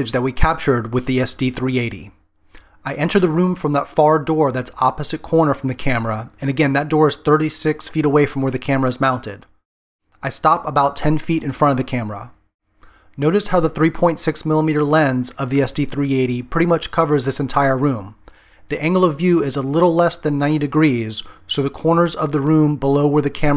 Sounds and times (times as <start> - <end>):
Speech: 0.0 - 2.2, 2.8 - 9.5, 10.2 - 12.4, 13.2 - 23.5.